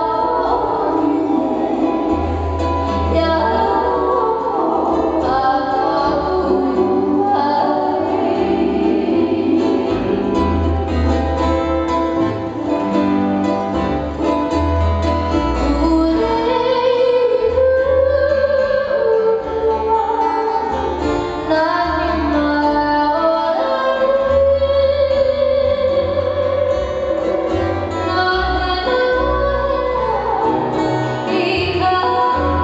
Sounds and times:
Choir: 0.0s - 10.8s.

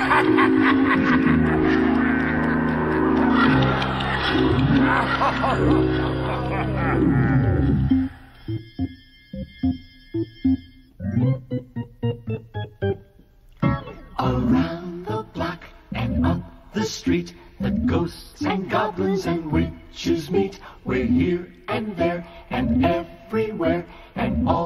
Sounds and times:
Music: 0.0s - 24.6s.

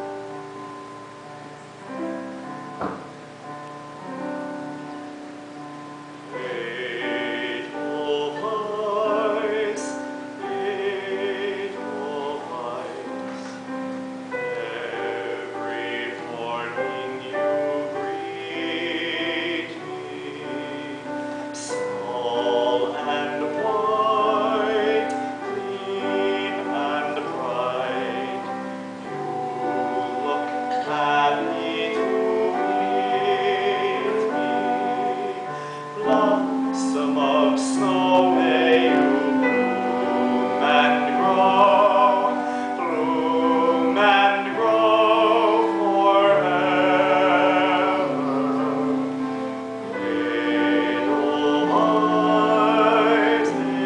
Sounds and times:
Sad music: 0.0s - 53.8s
Tender music: 0.0s - 53.8s.

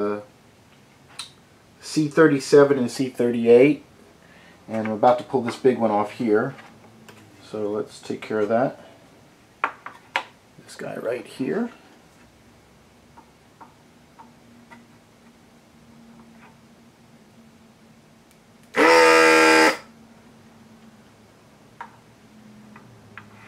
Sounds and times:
Speech: 0.0s - 0.3s, 1.8s - 3.9s, 4.7s - 6.6s, 7.4s - 8.8s, 10.6s - 11.8s.

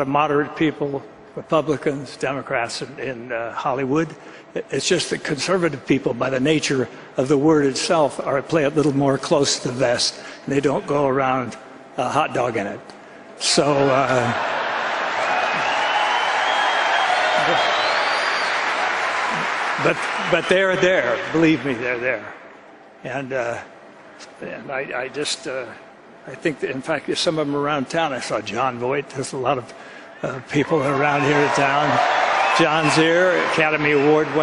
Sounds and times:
Male speech, man speaking: 0.0s - 12.8s, 13.4s - 14.4s, 19.8s - 22.3s, 23.0s - 23.7s, 24.4s - 34.4s
Narration, monologue: 0.0s - 14.4s, 19.3s - 34.4s.

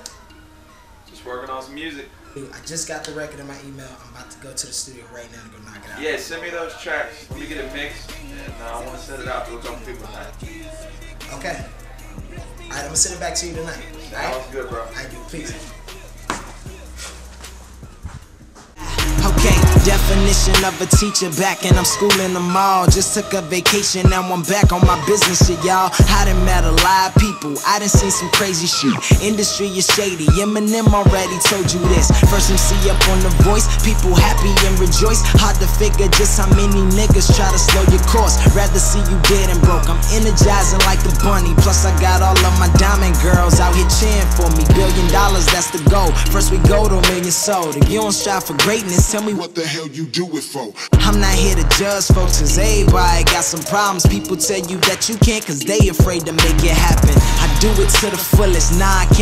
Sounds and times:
Exciting music: 18.8s - 49.4s, 51.0s - 59.2s.

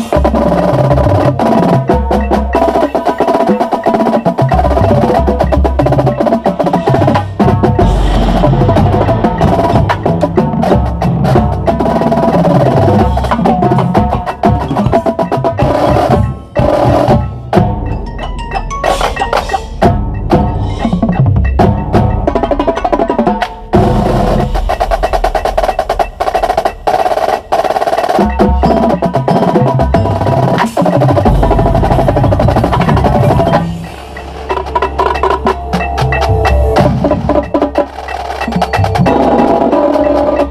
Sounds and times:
Independent music: 0.0s - 40.5s.

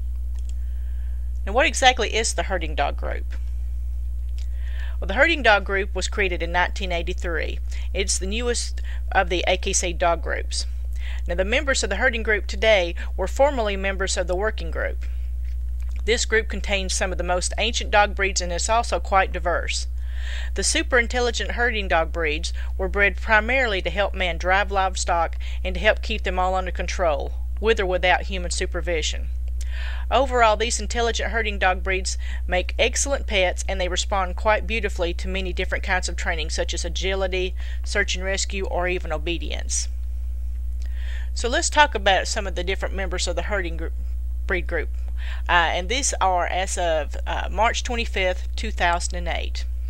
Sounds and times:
Speech: 1.5s - 3.4s, 5.0s - 15.0s, 16.0s - 19.9s, 20.6s - 29.2s, 30.1s - 39.9s, 41.4s - 43.9s, 44.5s - 44.9s, 45.5s - 49.6s.

